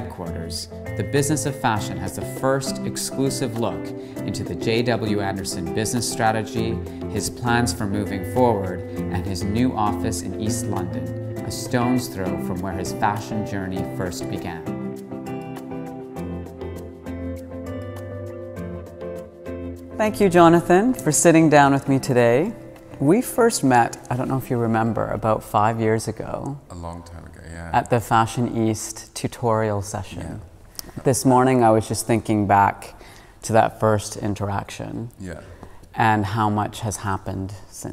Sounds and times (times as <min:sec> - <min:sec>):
Speech: 0:00.0 - 0:14.6, 0:23.0 - 0:30.4, 0:33.5 - 0:35.4
Music: 0:00.0 - 0:29.2.